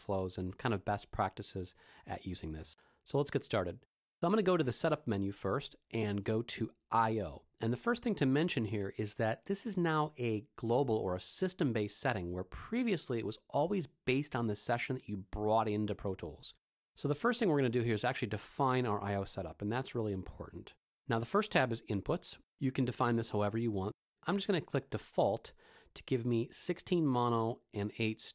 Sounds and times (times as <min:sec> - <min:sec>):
Speech: 0:00.0 - 0:28.3.